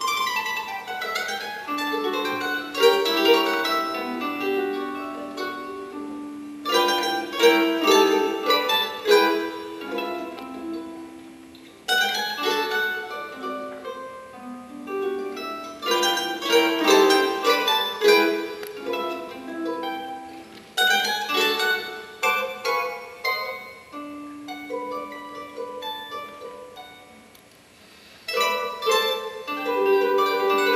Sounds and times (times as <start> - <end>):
Acoustic guitar: 0.0 - 30.7
Strum: 0.0 - 30.7.